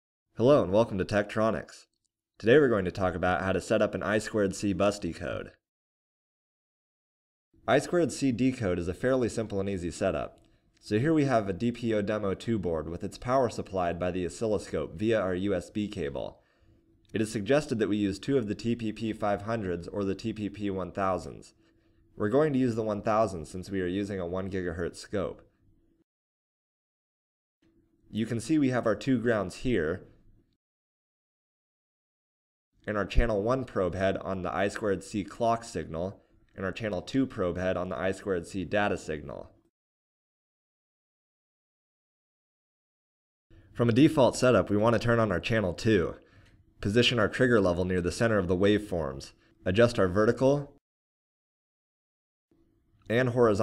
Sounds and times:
Speech: 0.4 - 5.6, 7.7 - 16.4, 17.1 - 21.6, 22.2 - 25.5, 28.1 - 30.2, 32.8 - 39.6, 43.8 - 46.2, 46.8 - 50.8, 53.1 - 53.6.

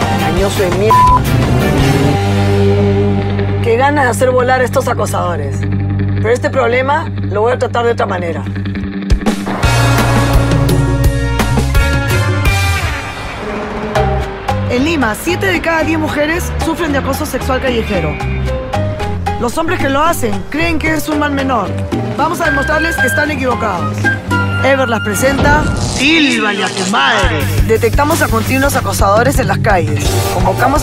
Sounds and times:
Music: 0.0 - 30.8
Speech: 3.6 - 5.6, 6.2 - 8.5, 19.4 - 23.9, 24.6 - 30.8.

